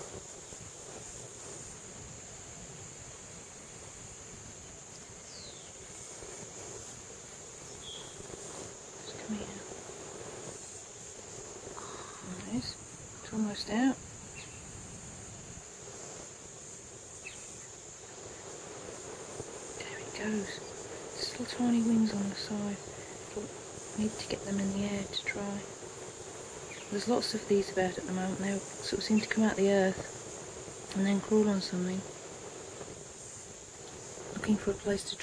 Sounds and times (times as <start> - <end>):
Speech: 12.2 - 14.0, 19.8 - 20.6, 21.2 - 22.8, 23.4 - 25.7, 26.9 - 30.1, 30.9 - 32.1, 34.4 - 35.2.